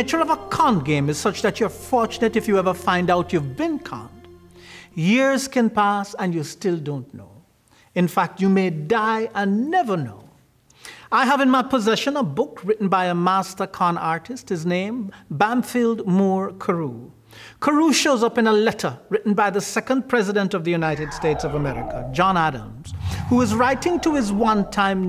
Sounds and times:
Speech: 0:00.0 - 0:04.2, 0:05.0 - 0:07.4, 0:08.0 - 0:10.4, 0:11.1 - 0:25.0
Music: 0:00.0 - 0:05.5.

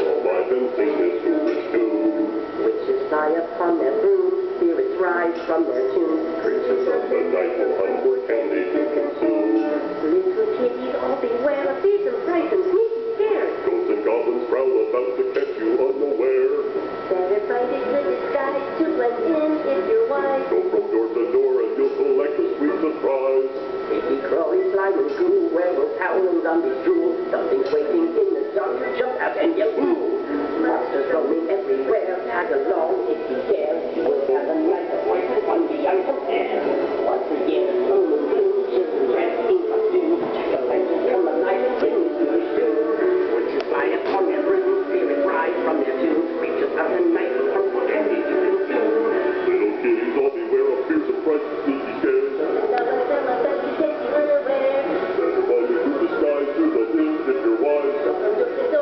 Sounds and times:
Music: 0:00.0 - 0:58.8.

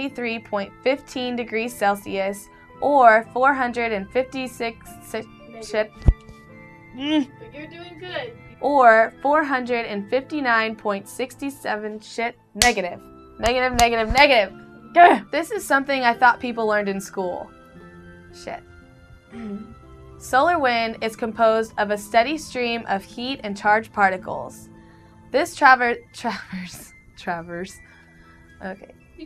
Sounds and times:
Music: 0:00.0 - 0:29.2.

